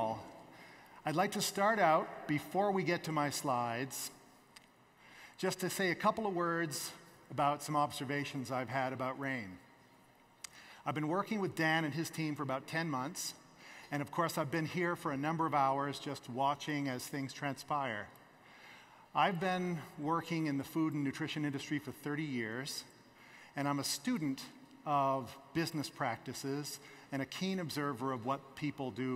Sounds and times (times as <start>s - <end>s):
Speech: 0.0s - 0.3s, 1.0s - 4.2s, 5.4s - 9.6s, 10.8s - 18.2s, 19.1s - 23.0s, 23.6s - 29.1s.